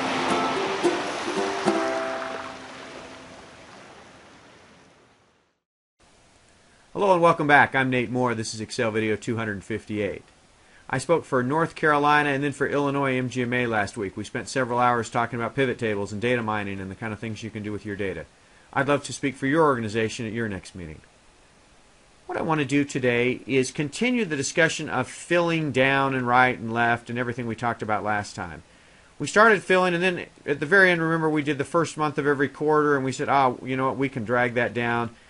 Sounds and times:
Speech: 7.0s - 10.3s, 10.9s - 21.1s, 22.3s - 28.6s, 29.2s - 35.2s.

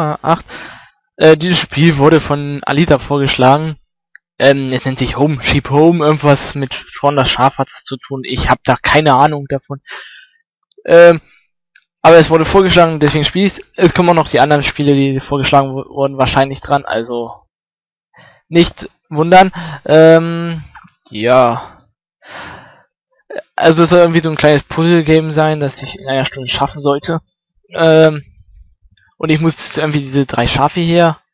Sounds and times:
Speech: 0.0s - 0.5s, 1.2s - 3.8s, 4.4s - 10.2s, 10.8s - 11.3s, 12.0s - 17.5s, 18.5s - 21.8s, 23.3s - 27.2s, 27.8s - 28.4s, 29.2s - 31.2s.

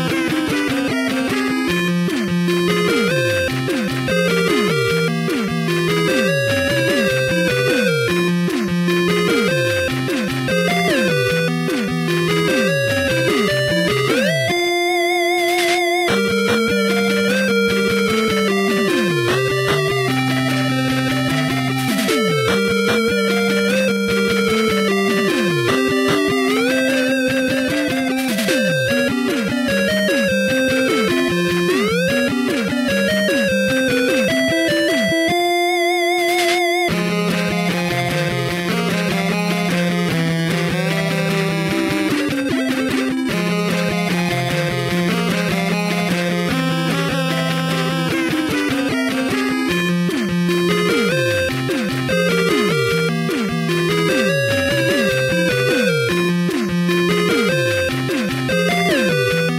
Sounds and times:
Video game music: 0.0s - 59.5s.

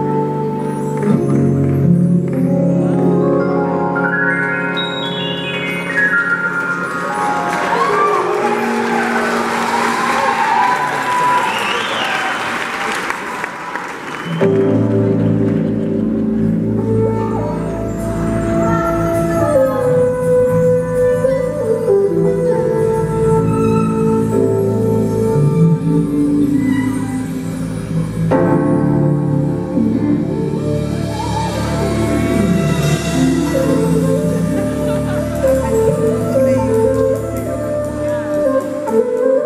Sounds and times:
Keyboard (musical): 0.0s - 12.4s, 14.2s - 39.4s
Applause: 6.6s - 16.0s.

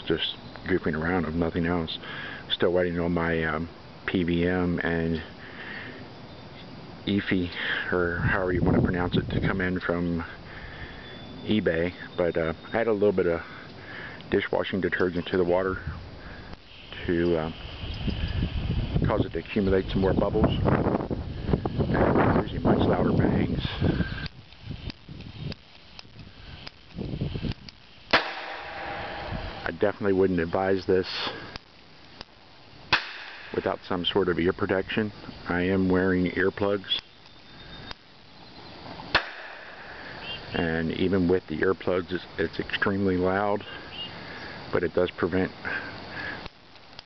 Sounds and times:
Speech: 0.0s - 5.3s, 7.1s - 10.4s, 11.5s - 13.5s, 14.3s - 15.9s, 17.0s - 17.6s, 19.0s - 20.7s, 22.0s - 23.8s, 29.6s - 31.4s, 33.6s - 37.0s, 40.5s - 43.8s, 44.7s - 45.8s
Explosion: 28.2s - 29.7s.

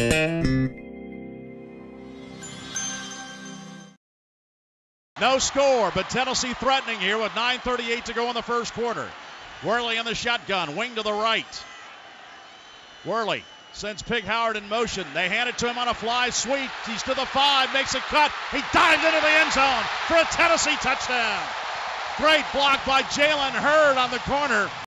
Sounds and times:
Speech: 5.2s - 11.7s, 13.1s - 21.5s, 22.2s - 24.8s.

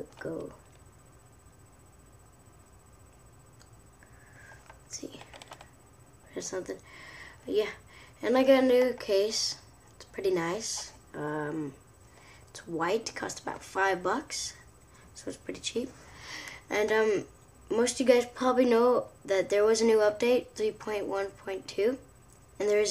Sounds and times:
Speech: 0.0s - 0.6s, 6.3s - 6.8s, 7.5s - 11.8s, 12.6s - 14.6s, 15.2s - 16.0s, 16.7s - 22.0s, 22.6s - 22.9s.

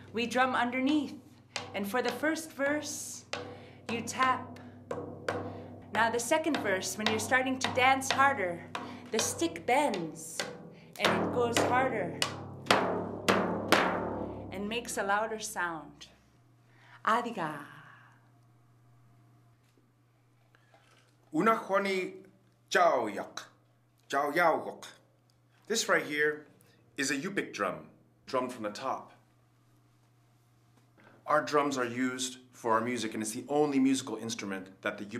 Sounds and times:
Speech: 1.8s - 3.2s, 3.9s - 4.5s, 6.0s - 8.6s, 9.2s - 10.4s, 11.0s - 12.2s, 25.7s - 26.4s, 31.3s - 35.1s
Echo: 3.3s - 9.4s.

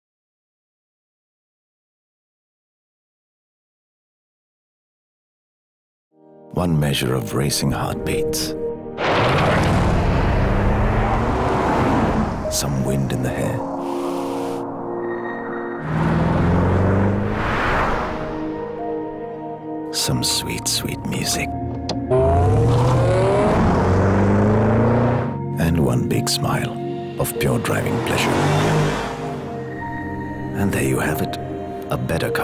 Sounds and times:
Music: 6.1s - 32.4s
Speech: 6.5s - 8.6s, 12.5s - 13.6s, 19.9s - 21.5s, 25.6s - 28.4s, 30.6s - 32.4s
Car: 9.0s - 12.5s, 15.8s - 18.2s, 21.7s - 25.4s, 27.5s - 29.6s.

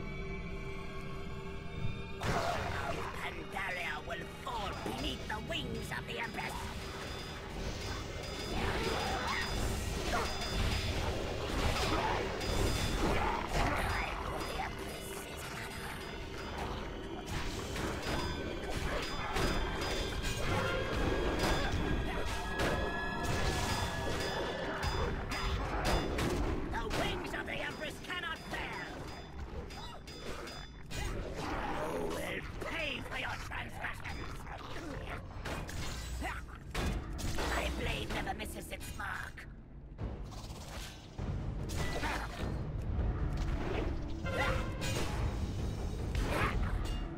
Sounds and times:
Music: 0.0s - 47.1s
Speech: 2.5s - 6.7s, 26.7s - 29.0s, 31.8s - 35.2s, 37.4s - 39.5s.

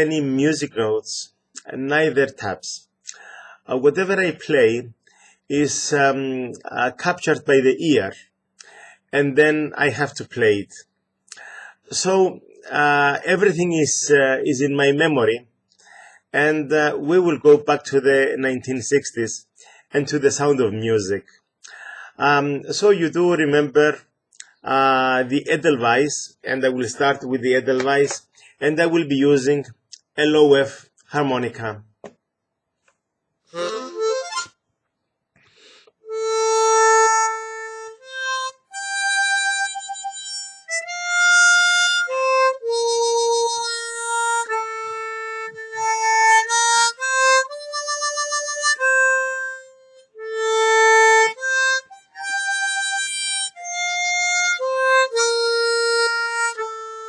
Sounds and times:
Speech: 0.0s - 2.9s, 3.7s - 8.3s, 9.2s - 10.9s, 11.9s - 15.5s, 16.4s - 21.3s, 22.2s - 31.9s
Music: 33.5s - 34.6s, 36.0s - 57.0s.

